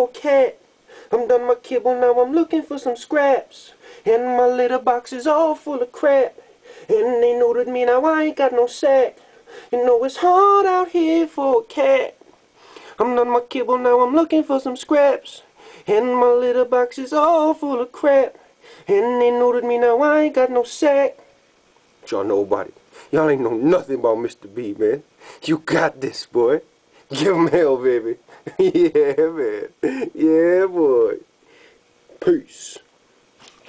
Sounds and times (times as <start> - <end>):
Speech: 22.0 - 28.2, 29.2 - 31.3, 32.1 - 32.9.